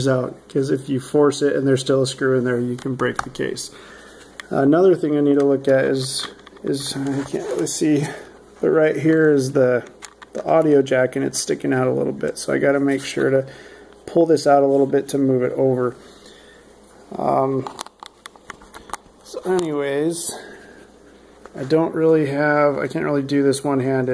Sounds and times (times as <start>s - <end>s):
Speech: 0.0s - 3.8s, 4.4s - 16.0s, 17.1s - 17.8s, 19.2s - 20.6s, 21.5s - 24.1s.